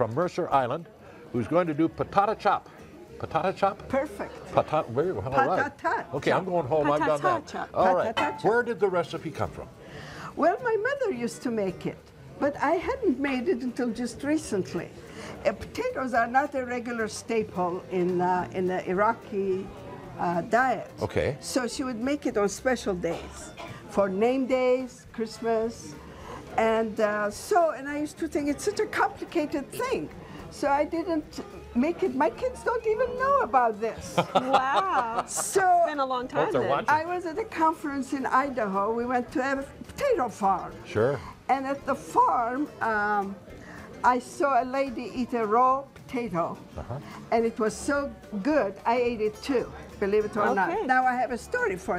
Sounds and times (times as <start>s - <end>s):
Music: 0.0s - 51.9s.